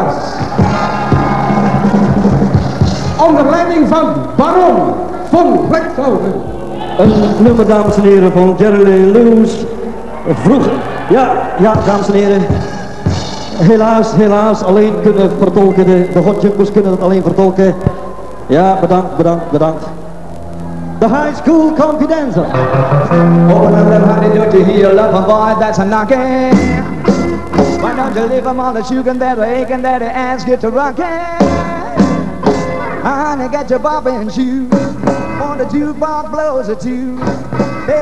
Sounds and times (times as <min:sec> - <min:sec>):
Rock and roll: 0:00.0 - 0:18.7, 0:19.6 - 0:38.0.